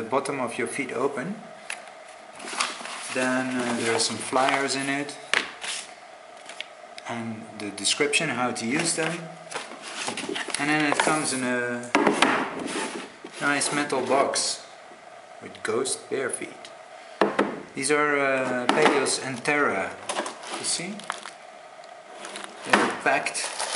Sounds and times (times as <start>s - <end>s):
Speech: 0.0s - 1.5s, 3.1s - 5.2s, 7.0s - 9.4s, 10.6s - 12.0s, 13.4s - 14.7s, 15.4s - 16.7s, 17.8s - 21.2s, 22.7s - 23.7s.